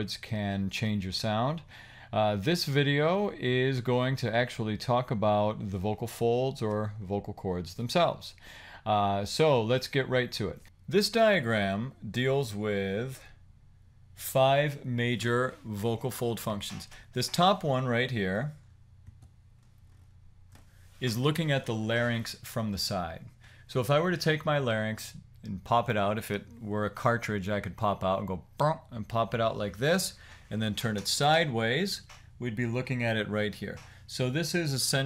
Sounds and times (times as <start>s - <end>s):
Speech: 0.0s - 13.4s, 14.2s - 18.6s, 21.0s - 35.0s.